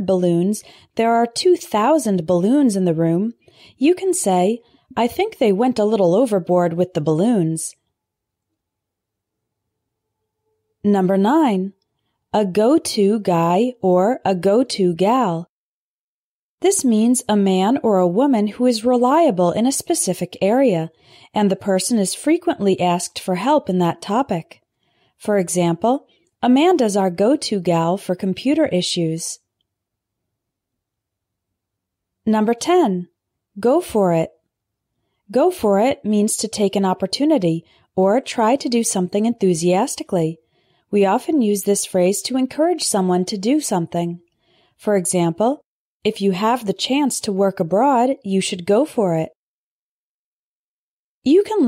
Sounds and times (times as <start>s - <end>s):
Narration, monologue: 0.0s - 10.0s, 10.6s - 15.6s, 16.6s - 49.4s, 51.2s - 51.6s.